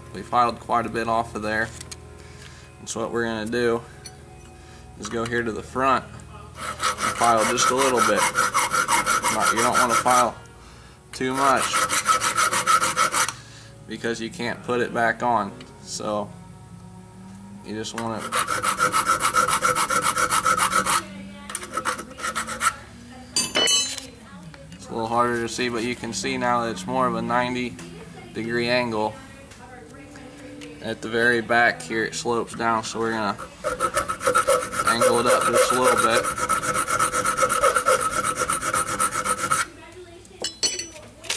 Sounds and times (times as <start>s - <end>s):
Filing (rasp): 6.6s - 10.3s, 11.2s - 13.4s, 18.1s - 21.0s, 21.6s - 22.8s, 33.3s - 39.7s
Rub: 6.6s - 10.3s, 11.3s - 13.3s, 18.2s - 21.0s, 21.6s - 22.8s, 33.3s - 39.7s.